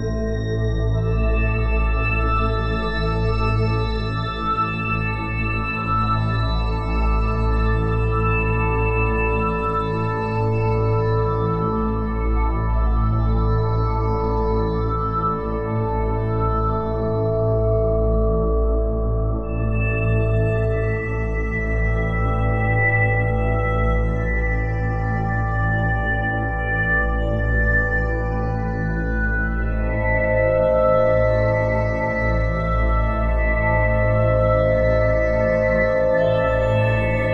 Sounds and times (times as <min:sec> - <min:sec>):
Ambient music: 0:28.0 - 0:37.3.